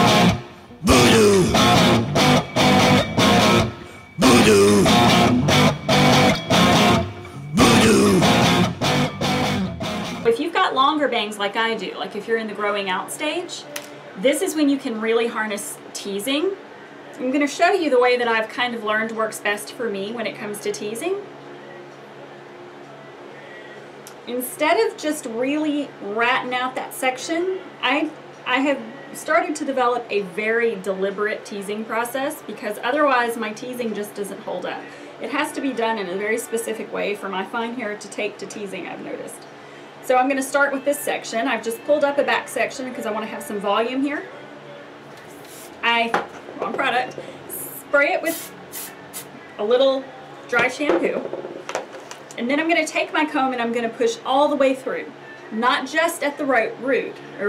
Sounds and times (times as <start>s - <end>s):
Electric guitar: 0.0s - 10.3s
Singing: 0.8s - 1.9s, 4.2s - 5.3s, 7.5s - 8.5s
Speech: 0.9s - 1.5s, 10.3s - 16.6s, 17.2s - 21.3s, 24.3s - 39.5s, 40.1s - 44.5s, 45.8s - 48.4s, 49.6s - 51.2s, 52.4s - 57.4s.